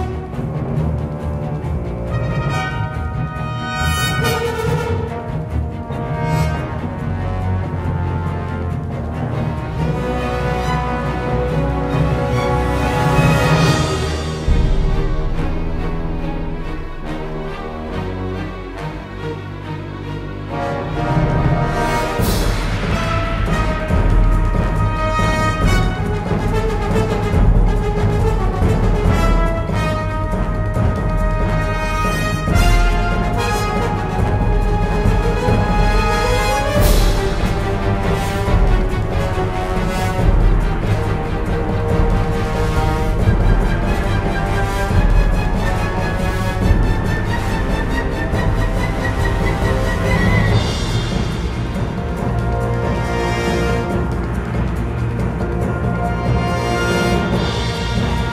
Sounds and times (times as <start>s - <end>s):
Music: 0.0s - 58.3s.